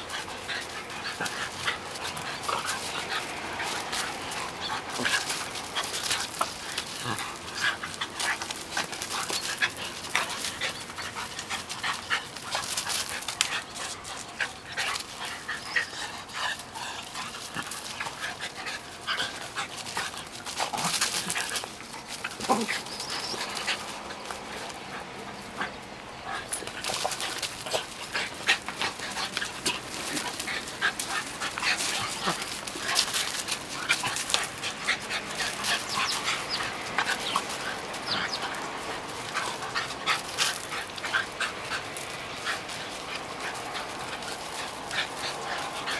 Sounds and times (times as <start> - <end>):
Canidae, dogs, wolves: 0.0 - 45.9
Dog: 0.0 - 45.9.